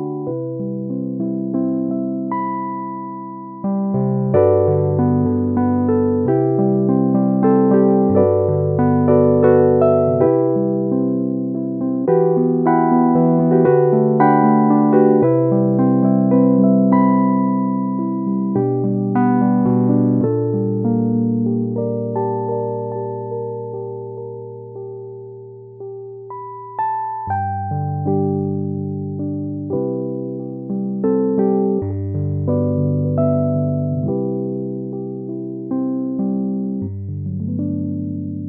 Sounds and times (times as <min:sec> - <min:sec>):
Electric piano: 0:00.0 - 0:38.4.